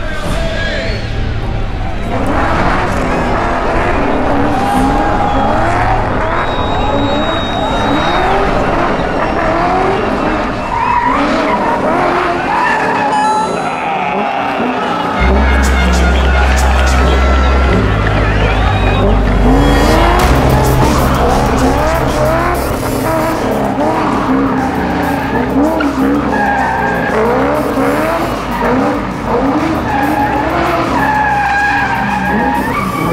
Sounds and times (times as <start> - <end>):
Music: 0.0 - 12.2, 15.1 - 33.1
Car: 0.0 - 33.1.